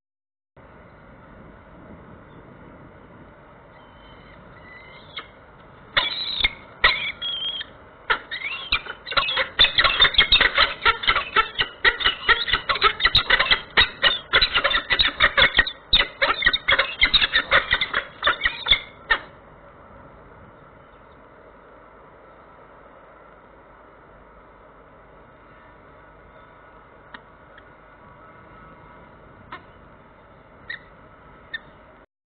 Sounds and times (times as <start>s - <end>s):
Bird: 3.7s - 5.4s, 6.0s - 19.4s, 27.5s - 31.9s.